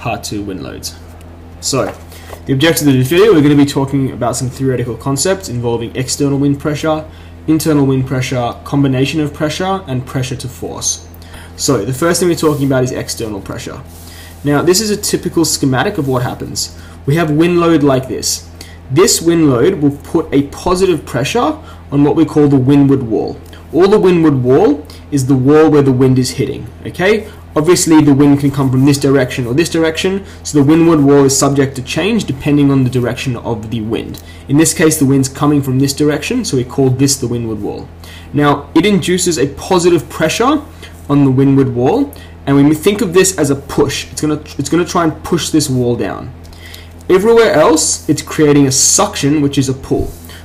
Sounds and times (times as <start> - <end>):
Speech: 0.0 - 1.0, 1.6 - 46.4, 47.1 - 50.2.